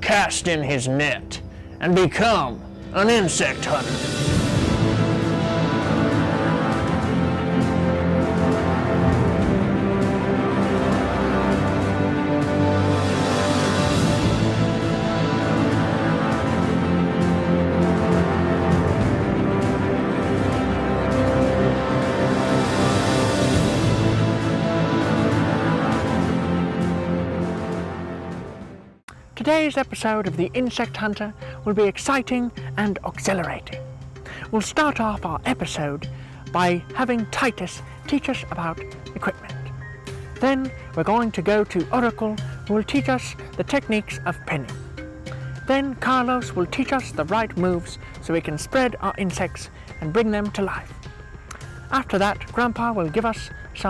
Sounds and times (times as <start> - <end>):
Music: 0.0 - 53.9.